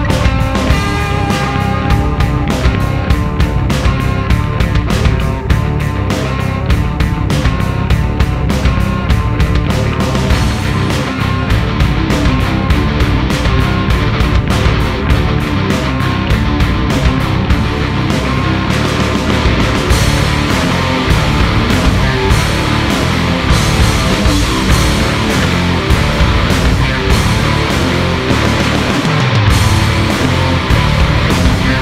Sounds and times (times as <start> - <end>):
Heavy metal: 0.0 - 31.8.